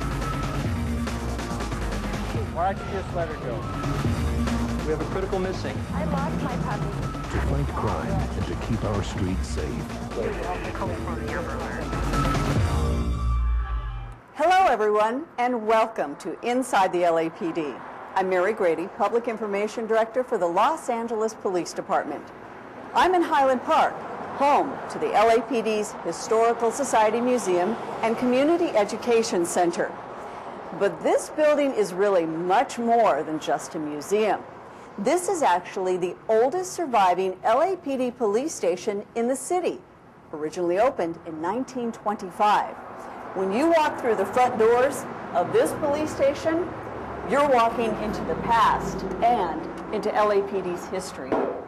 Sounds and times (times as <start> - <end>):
Music: 0.0 - 14.2.